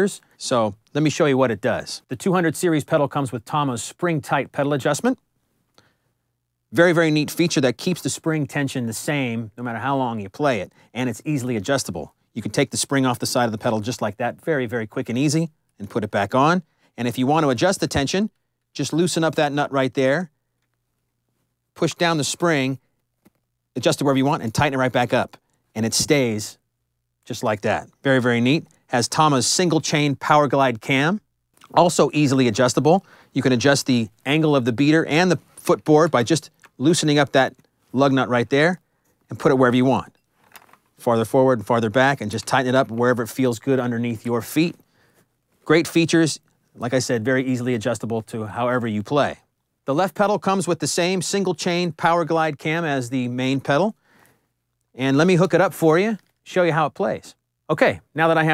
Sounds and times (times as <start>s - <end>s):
Speech: 0.0s - 5.2s, 6.7s - 20.4s, 21.8s - 22.8s, 23.7s - 26.6s, 27.2s - 40.2s, 41.0s - 44.8s, 45.6s - 54.0s, 54.9s - 58.5s.